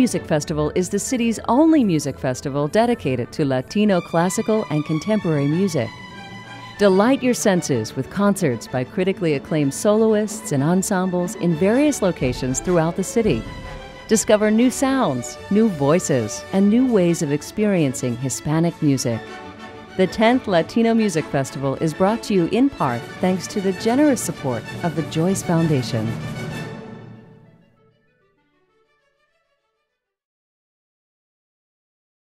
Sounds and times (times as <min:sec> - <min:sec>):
Speech: 0:00.0 - 0:05.9, 0:06.8 - 0:13.5, 0:14.1 - 0:19.2, 0:20.0 - 0:26.1
Music: 0:00.0 - 0:30.3.